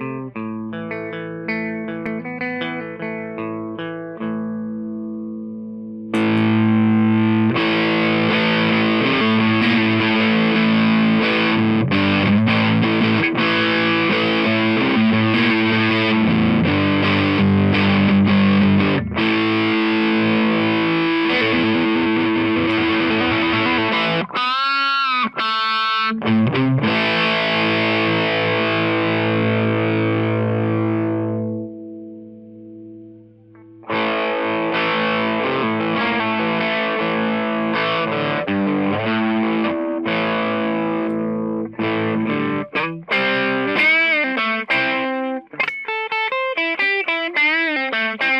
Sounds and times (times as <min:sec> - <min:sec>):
Distortion: 0:00.0 - 0:48.3
Music: 0:00.0 - 0:48.3.